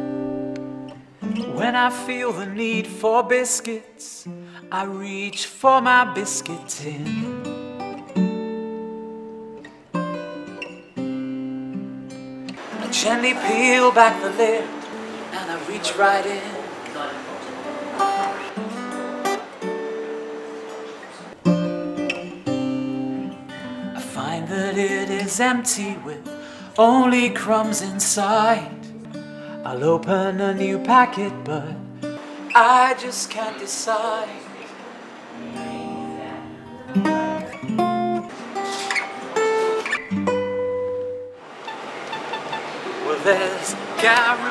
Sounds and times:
Music: 0.0s - 34.7s, 35.3s - 41.4s
Speech: 15.4s - 18.5s.

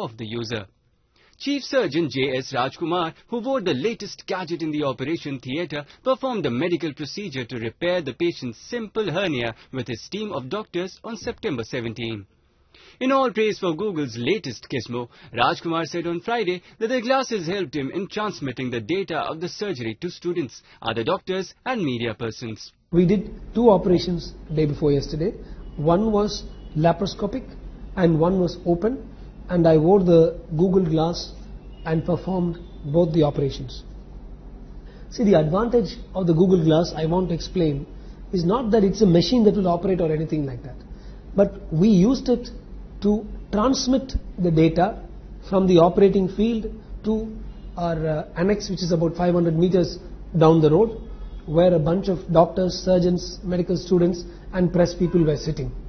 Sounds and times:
Speech: 0.0s - 0.7s, 1.4s - 12.3s, 13.0s - 33.9s, 35.1s - 40.8s, 41.4s - 55.8s.

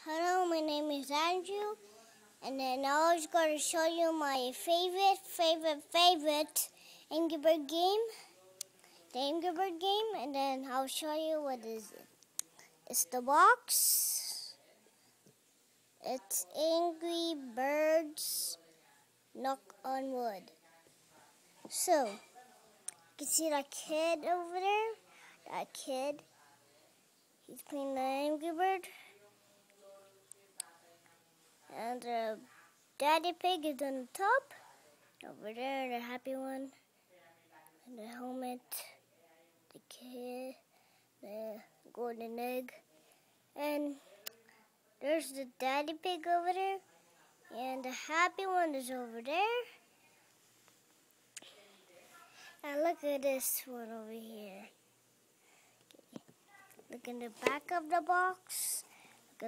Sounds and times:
Speech: 0.0s - 15.4s, 16.0s - 50.3s, 51.4s - 54.8s, 55.9s - 59.4s.

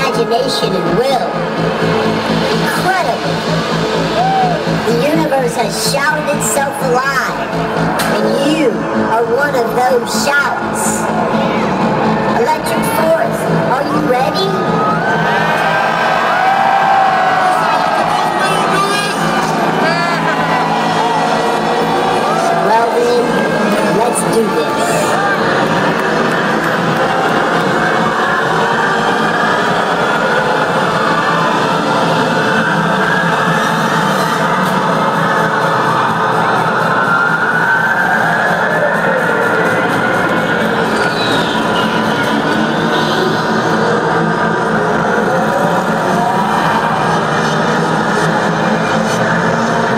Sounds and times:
Speech: 0.0s - 1.4s, 4.8s - 11.7s, 12.4s - 14.7s, 22.4s - 25.2s
Music: 0.0s - 49.9s.

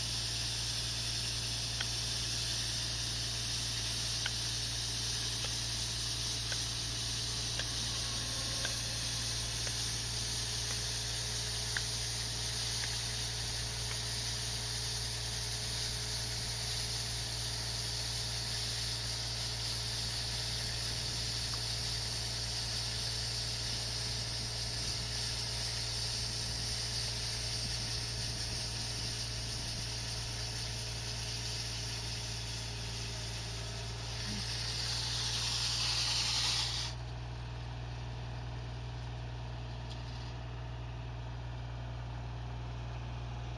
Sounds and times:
Drill: 0.0s - 37.1s
Vehicle: 0.0s - 43.5s.

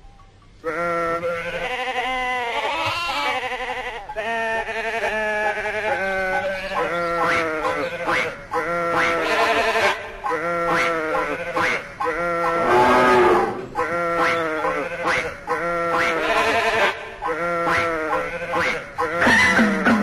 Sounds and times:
Bleat: 0.6s - 20.0s.

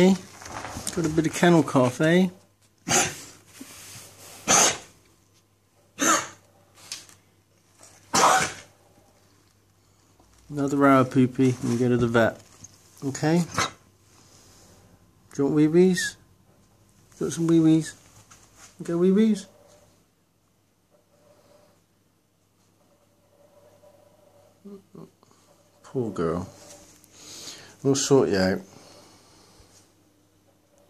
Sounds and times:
Speech: 0.0s - 0.3s, 0.9s - 2.4s, 10.5s - 13.6s, 15.3s - 16.3s, 17.2s - 18.0s, 18.8s - 19.6s, 25.8s - 26.7s, 27.8s - 28.8s.

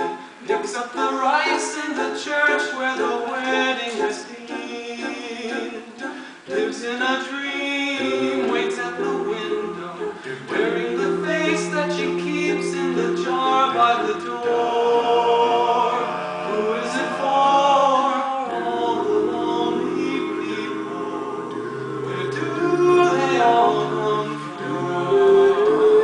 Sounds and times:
Choir: 0.0s - 26.0s.

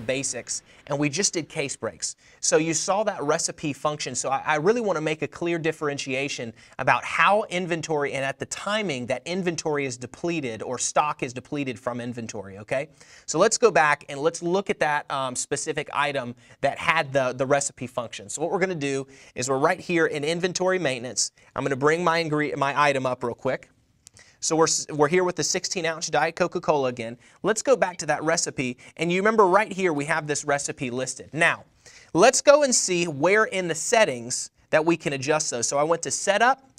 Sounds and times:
Speech: 0.0s - 23.7s, 24.4s - 36.7s.

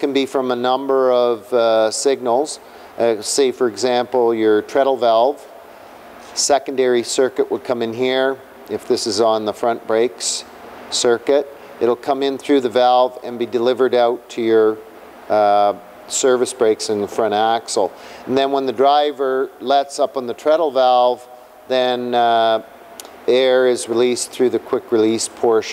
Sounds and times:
Speech: 0.0s - 5.5s, 6.3s - 22.7s, 23.3s - 25.7s.

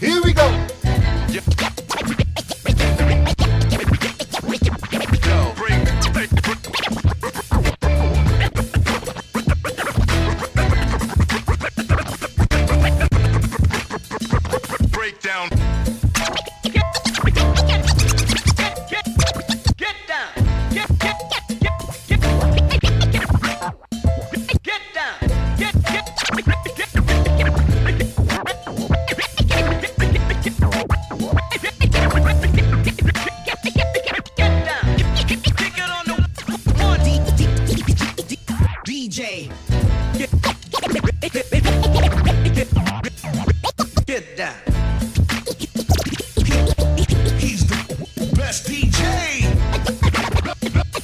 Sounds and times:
Electronic music: 0.0s - 19.8s, 20.4s - 44.0s, 44.7s - 51.0s
Scratching (performance technique): 0.0s - 38.9s, 39.6s - 51.0s.

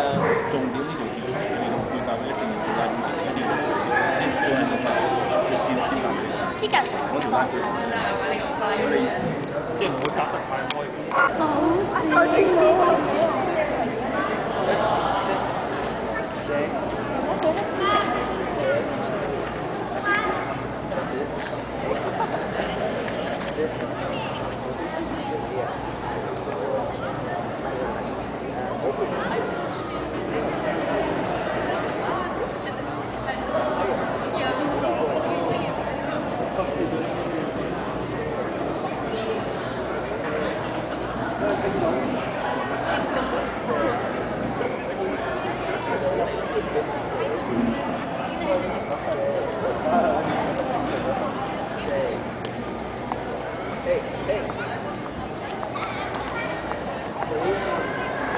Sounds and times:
Speech: 0.0s - 58.3s.

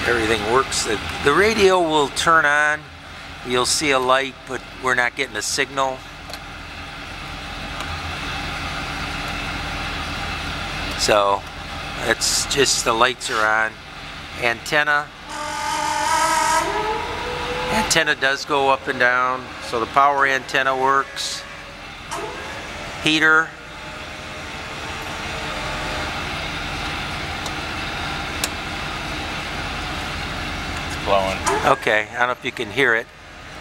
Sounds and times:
Speech: 0.0s - 2.9s, 3.5s - 6.0s, 11.0s - 11.4s, 12.0s - 13.8s, 14.4s - 15.1s, 17.7s - 21.4s, 31.0s - 33.1s.

